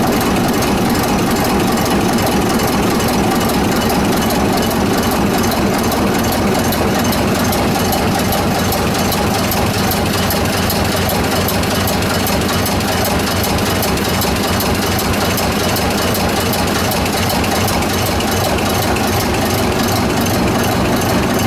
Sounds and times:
Heavy engine (low frequency): 0.0 - 21.4
Idling: 0.0 - 21.4.

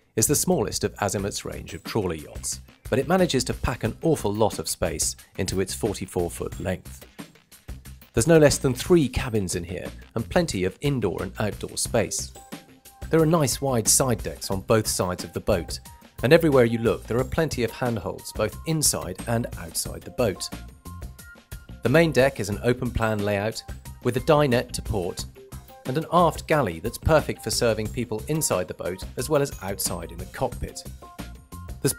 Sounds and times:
Music: 0.0 - 31.9
Speech: 0.2 - 7.0, 8.2 - 12.4, 13.1 - 20.6, 21.8 - 25.3, 25.9 - 30.9.

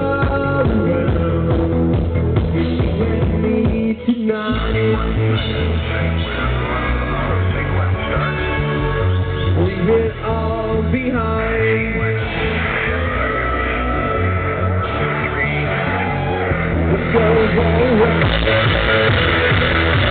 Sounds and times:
Music: 0.0 - 20.1.

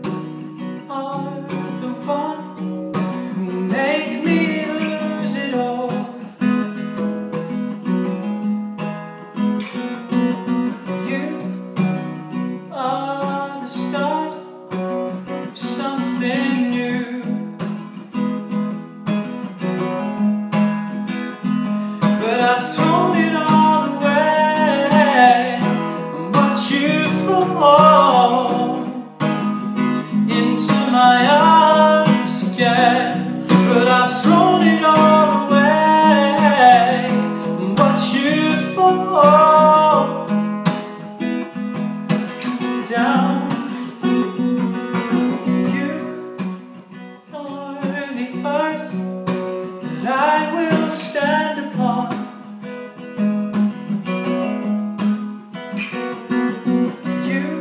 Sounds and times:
Acoustic guitar: 0.0 - 57.6.

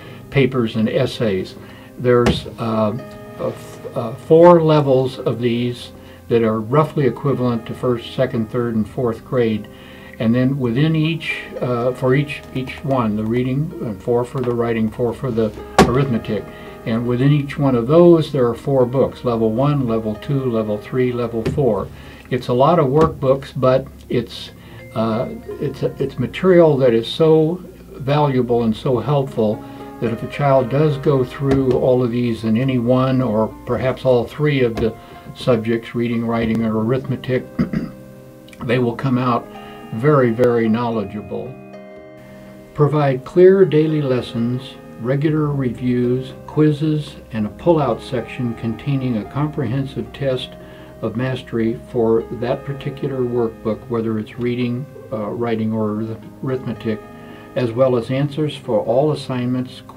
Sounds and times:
Music: 0.0 - 59.9
Speech: 0.3 - 37.7, 38.6 - 41.6, 42.8 - 59.9.

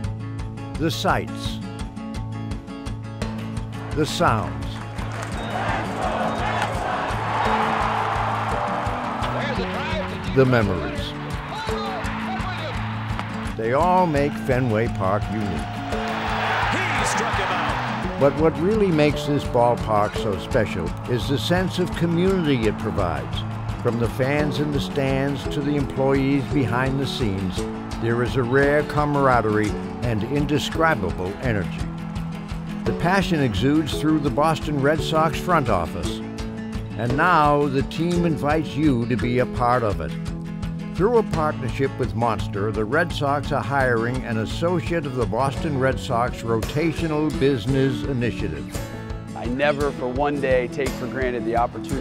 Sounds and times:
Music: 0.0 - 52.0
Speech: 0.8 - 1.6, 4.0 - 4.8, 9.4 - 12.7, 13.6 - 15.6, 18.2 - 31.8, 32.9 - 36.2, 37.0 - 40.2, 41.0 - 48.7, 49.4 - 52.0.

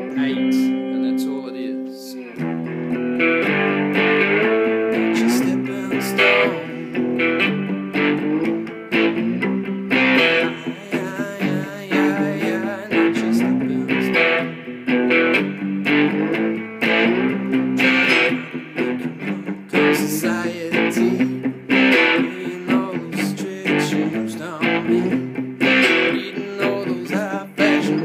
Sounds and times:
Acoustic guitar: 0.0 - 28.0
Electric guitar: 0.0 - 28.0
Strum: 0.0 - 28.0.

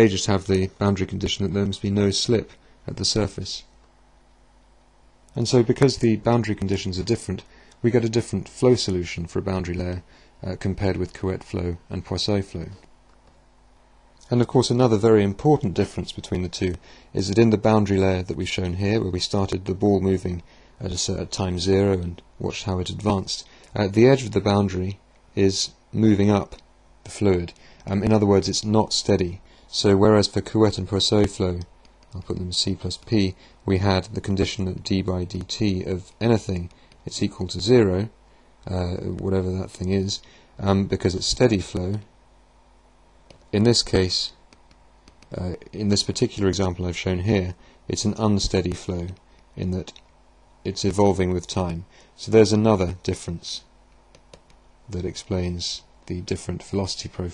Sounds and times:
Speech: 0.0 - 3.7, 5.3 - 12.9, 14.2 - 42.2, 43.5 - 44.4, 45.3 - 50.0, 50.6 - 53.7, 54.9 - 57.3.

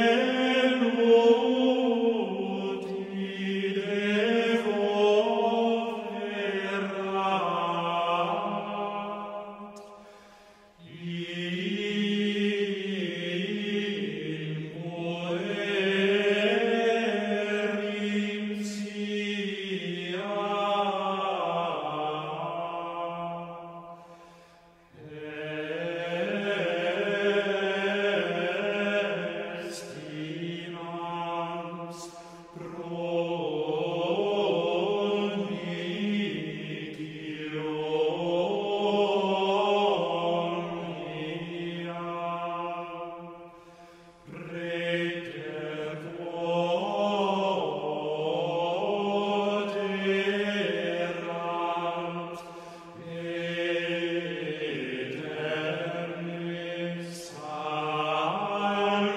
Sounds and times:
Mantra: 0.0 - 9.6, 10.8 - 23.7, 25.0 - 43.3, 44.3 - 59.1.

